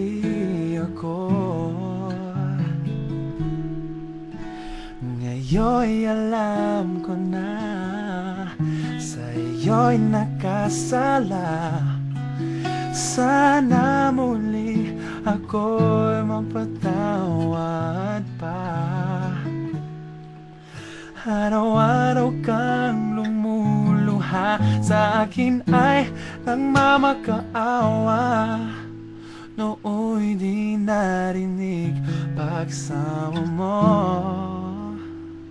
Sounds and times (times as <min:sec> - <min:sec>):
Male singing: 0:00.0 - 0:02.8, 0:05.0 - 0:12.0, 0:12.8 - 0:19.6, 0:21.2 - 0:28.9, 0:29.5 - 0:35.1
Music: 0:00.0 - 0:35.5.